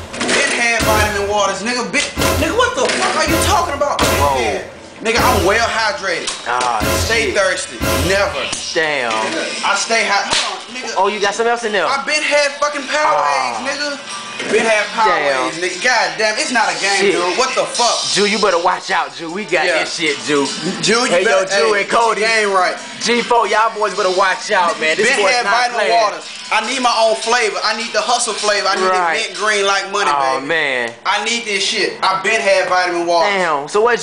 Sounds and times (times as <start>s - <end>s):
Music: 0.0s - 30.2s
Speech: 0.3s - 34.0s.